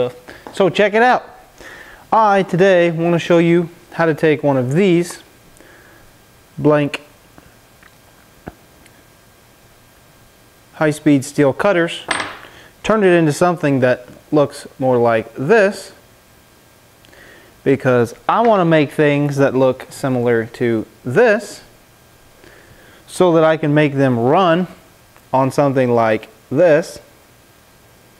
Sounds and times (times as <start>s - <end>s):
Speech: 0.0s - 1.4s, 2.1s - 5.3s, 6.6s - 7.1s, 10.8s - 12.1s, 12.8s - 16.0s, 17.6s - 21.7s, 23.1s - 27.1s.